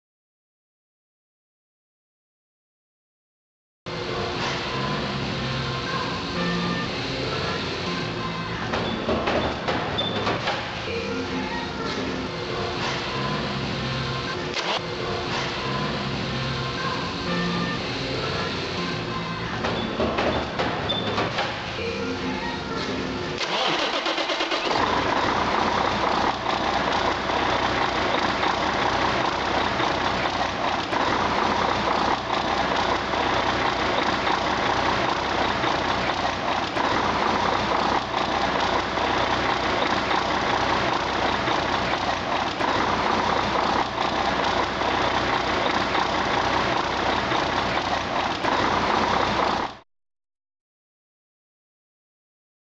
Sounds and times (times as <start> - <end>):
Heavy engine (low frequency): 3.9 - 49.8.